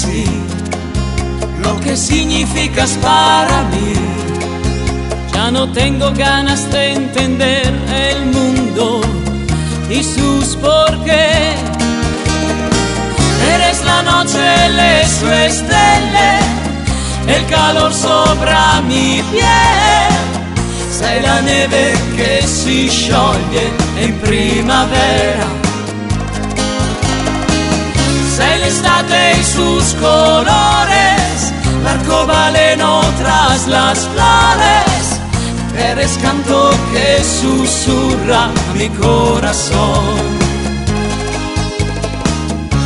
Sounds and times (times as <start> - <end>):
Music: 0.0 - 42.8.